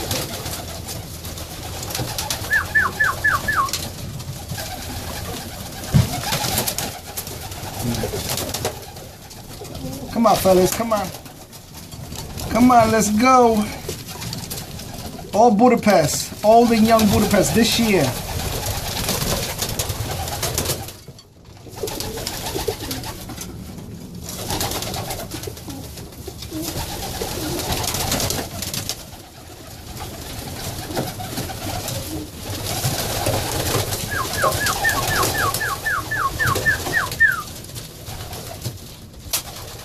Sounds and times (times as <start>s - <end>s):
Pigeon, dove: 0.0s - 10.5s, 18.2s - 23.6s, 24.2s - 39.8s
Speech: 10.1s - 11.2s, 12.5s - 13.9s, 15.4s - 18.2s.